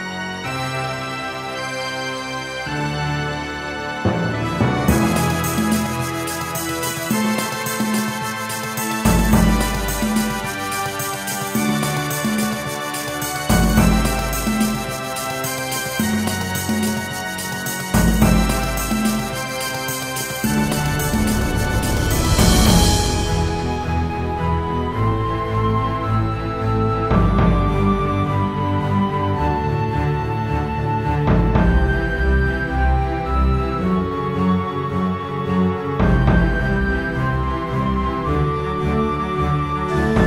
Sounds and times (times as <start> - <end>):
Music: 0.0 - 40.2.